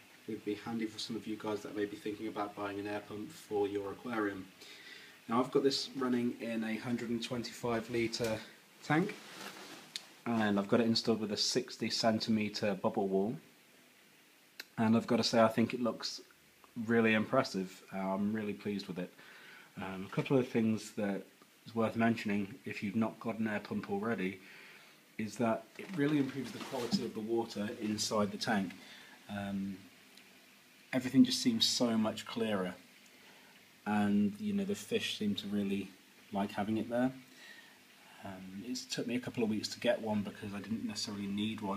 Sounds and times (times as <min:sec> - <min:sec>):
Speech: 0:00.3 - 0:04.6, 0:05.3 - 0:09.2, 0:10.2 - 0:13.5, 0:14.6 - 0:19.2, 0:19.8 - 0:24.4, 0:25.2 - 0:29.9, 0:30.9 - 0:32.8, 0:33.8 - 0:37.3, 0:38.2 - 0:41.7.